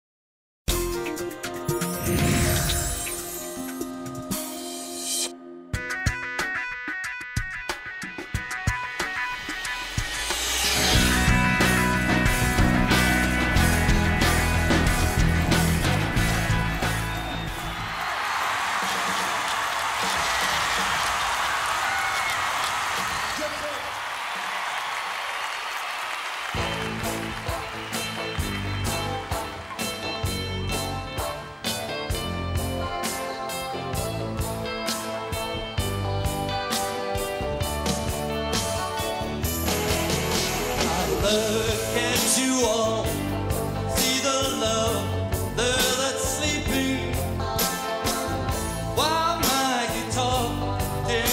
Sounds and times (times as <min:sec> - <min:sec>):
Guitar: 0:00.7 - 0:18.1, 0:26.5 - 0:51.3.